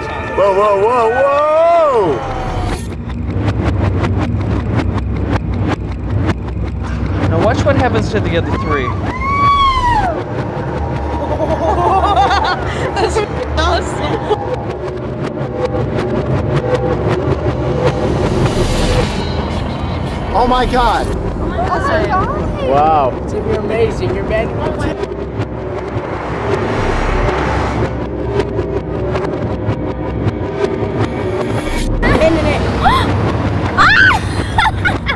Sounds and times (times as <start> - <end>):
Music: 0.0 - 35.1.